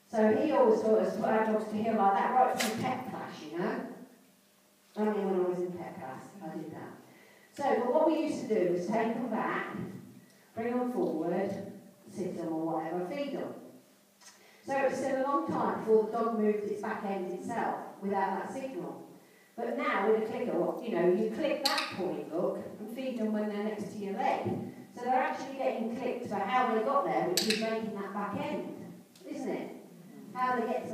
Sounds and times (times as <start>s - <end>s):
Speech: 0.1s - 4.0s, 4.9s - 7.0s, 7.6s - 10.0s, 10.6s - 13.6s, 14.6s - 19.0s, 19.6s - 30.9s.